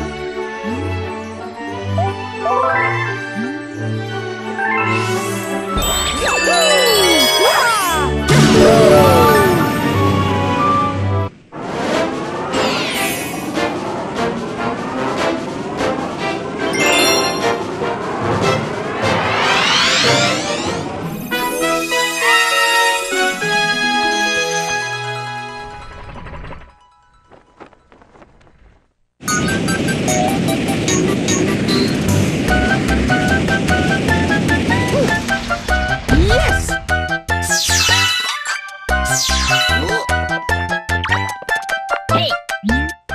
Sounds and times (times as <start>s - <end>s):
Music: 0.0s - 27.8s, 31.7s - 43.1s.